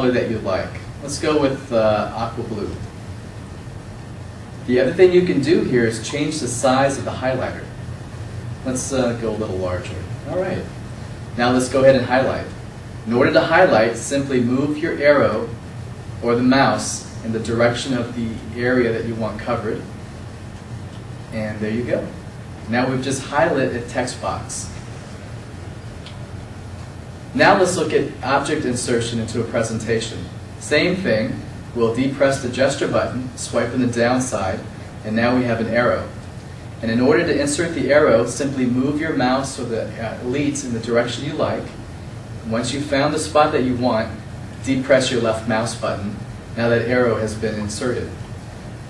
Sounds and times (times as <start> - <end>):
Speech: 0.0 - 2.9, 4.7 - 7.8, 8.6 - 10.8, 11.4 - 15.6, 16.2 - 19.9, 21.3 - 24.8, 27.4 - 36.2, 36.8 - 41.8, 42.4 - 48.2.